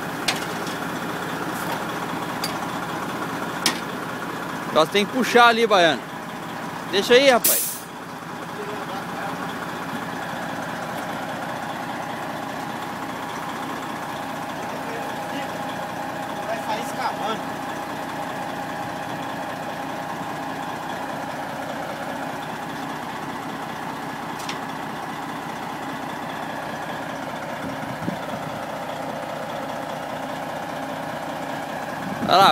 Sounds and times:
Truck: 0.0s - 32.5s
Speech: 4.7s - 6.0s, 6.9s - 7.6s, 8.5s - 9.5s, 14.7s - 15.6s, 16.4s - 17.4s, 32.2s - 32.5s.

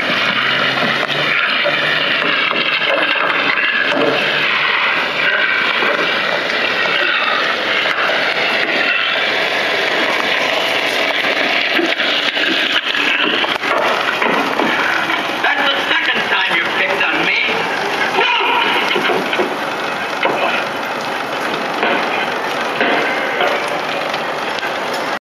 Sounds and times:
Bicycle: 0.0s - 25.2s
Speech: 6.8s - 7.5s, 15.4s - 17.6s, 18.2s - 18.9s, 20.2s - 20.7s.

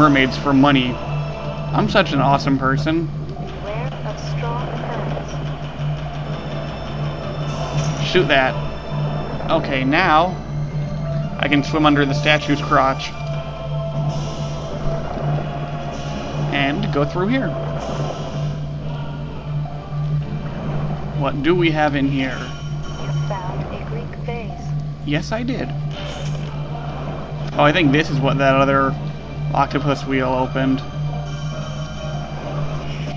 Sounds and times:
Music: 0.0s - 33.1s
Speech: 1.8s - 5.4s, 11.4s - 13.1s, 16.5s - 17.6s, 23.1s - 25.7s, 27.6s - 29.0s, 29.6s - 30.8s.

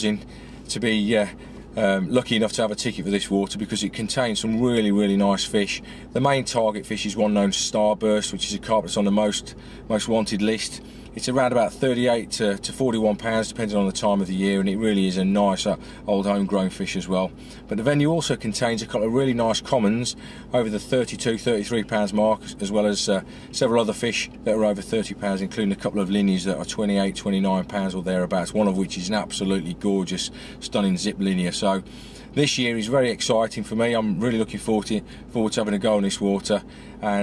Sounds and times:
Speech: 0.0s - 37.2s.

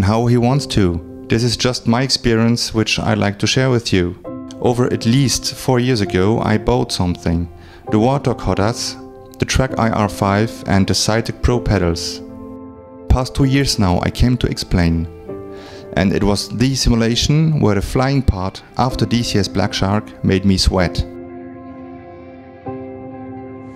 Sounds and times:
Speech: 0.0s - 12.3s, 13.1s - 15.1s, 16.0s - 21.2s
Music: 0.0s - 23.7s.

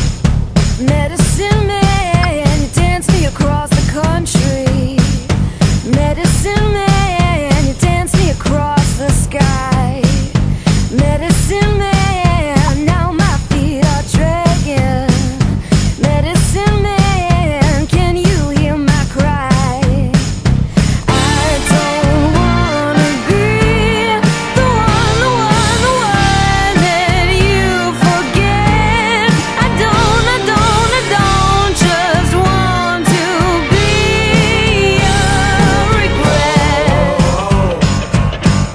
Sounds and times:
Music: 0.0s - 38.7s.

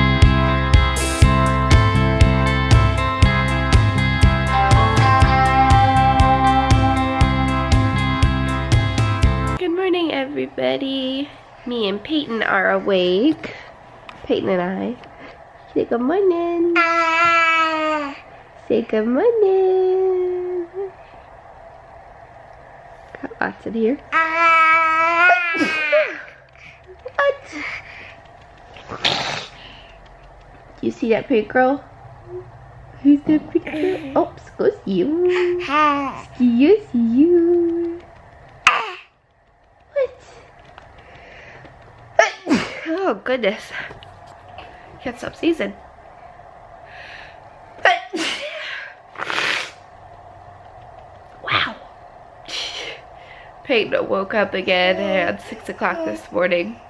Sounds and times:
Speech: 9.6s - 13.4s, 30.8s - 31.8s, 53.7s - 56.8s.

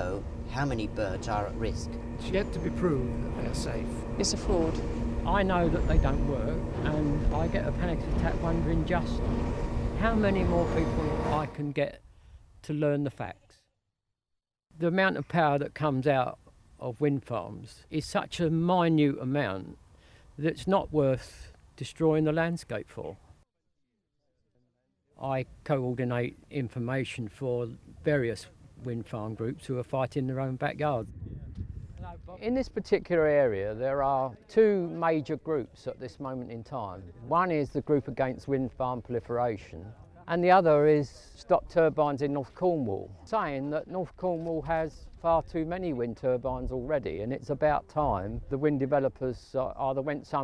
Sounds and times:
Speech: 0.0s - 9.2s, 10.0s - 12.0s, 12.6s - 13.6s, 14.8s - 19.8s, 20.4s - 23.2s, 25.2s - 31.1s, 32.0s - 50.4s.

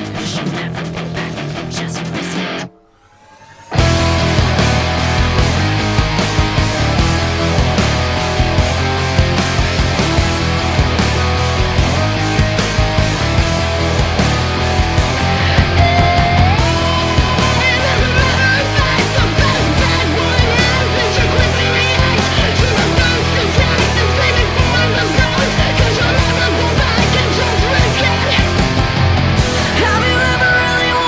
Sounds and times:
Progressive rock: 0.0s - 31.0s.

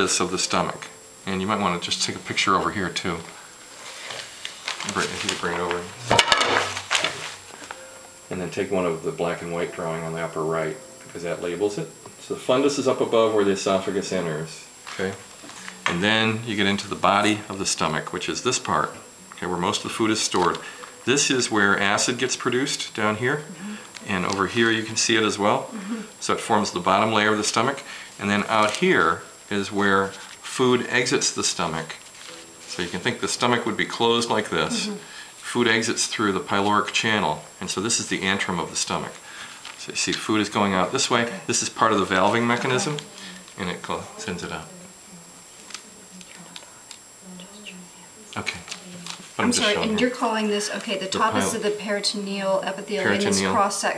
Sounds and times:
Speech: 0.0s - 3.3s, 4.8s - 6.2s, 8.3s - 32.0s, 32.7s - 39.2s, 39.8s - 44.9s, 47.3s - 53.9s.

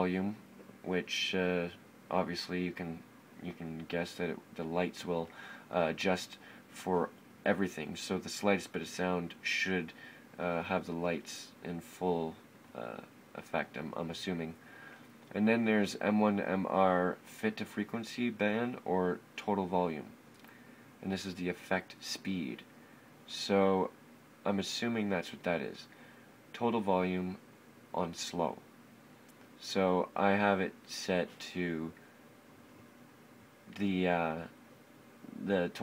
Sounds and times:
Speech: 0.0s - 14.6s, 15.3s - 20.2s, 21.0s - 22.7s, 23.3s - 25.9s, 26.5s - 28.6s, 29.6s - 32.0s, 33.7s - 34.6s, 35.3s - 35.8s.

